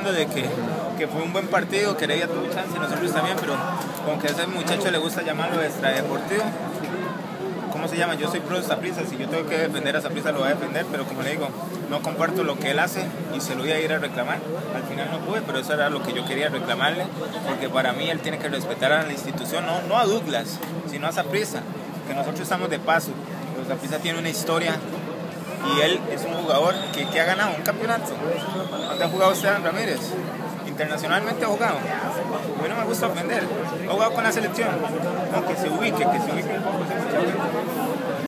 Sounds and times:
Speech: 0.0s - 38.2s.

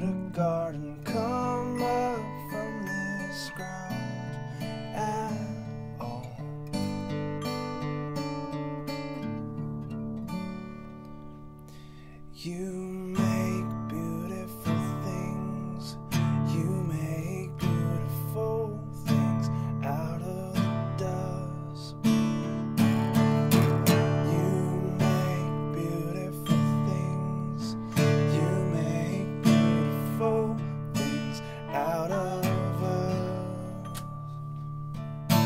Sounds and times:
Acoustic guitar: 0.0s - 35.4s.

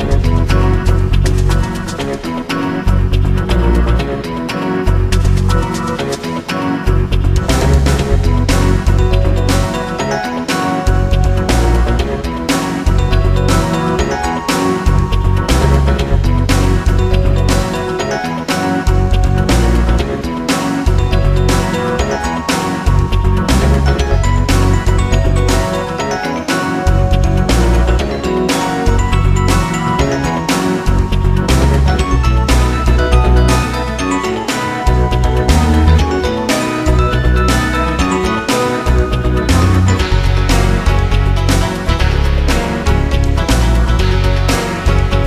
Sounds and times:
Music: 0.0s - 45.2s.

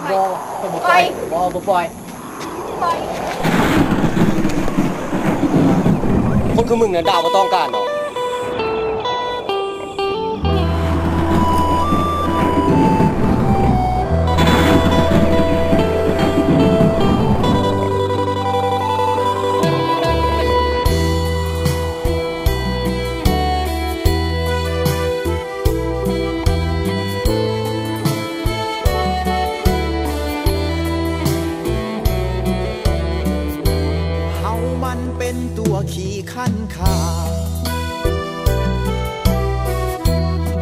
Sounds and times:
Speech: 0.0s - 1.9s, 6.6s - 7.8s
Music: 6.9s - 40.6s.

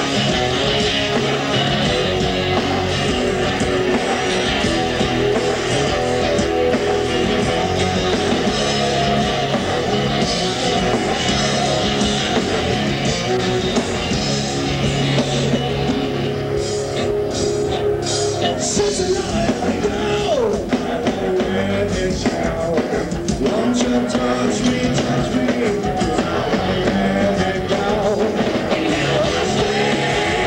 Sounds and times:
Rock music: 0.0s - 30.4s.

